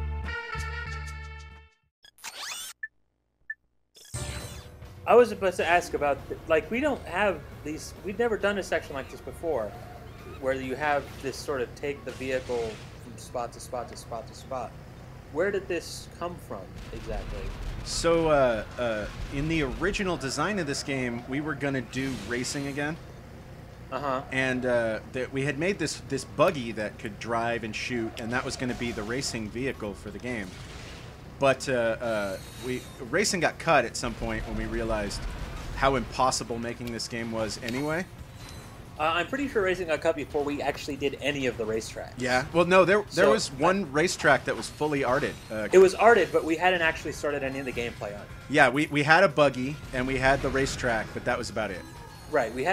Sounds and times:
Speech: 0:10.3 - 0:14.7, 0:15.4 - 0:23.0, 0:24.0 - 0:30.5, 0:31.4 - 0:35.2, 0:35.8 - 0:38.1, 0:39.0 - 0:52.7.

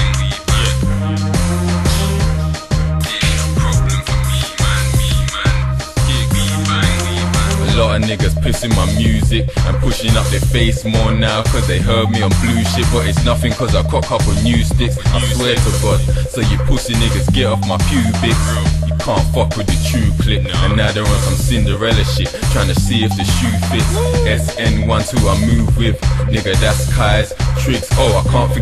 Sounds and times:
Hip hop music: 0:00.0 - 0:28.6.

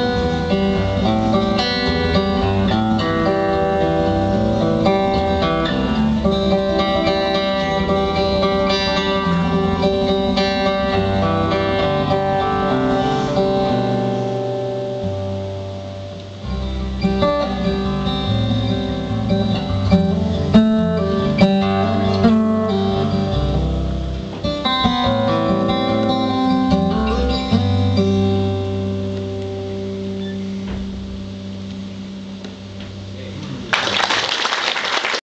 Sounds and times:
Acoustic guitar: 0:00.0 - 0:34.4.

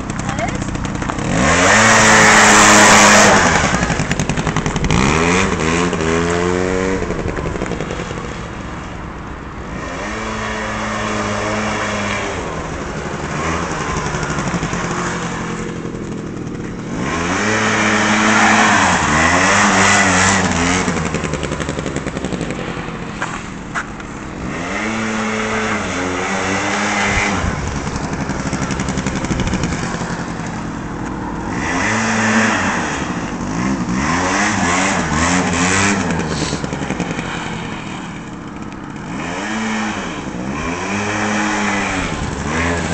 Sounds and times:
Motorcycle: 0:00.0 - 0:42.9
Outside, urban or manmade: 0:00.0 - 0:42.9.

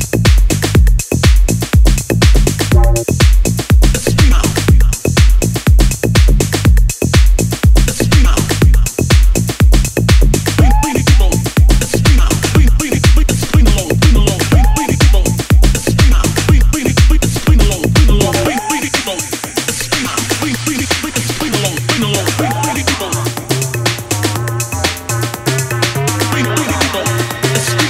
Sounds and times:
Dance music: 0:00.0 - 0:27.8.

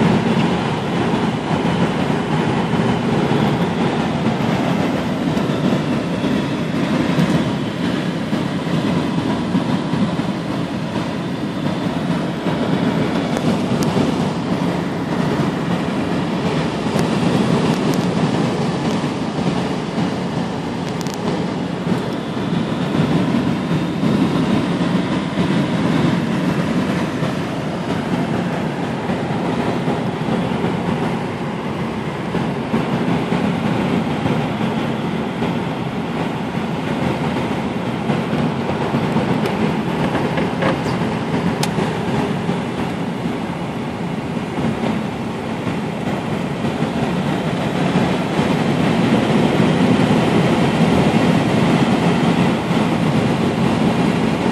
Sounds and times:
Fixed-wing aircraft, airplane: 0:00.0 - 0:54.5.

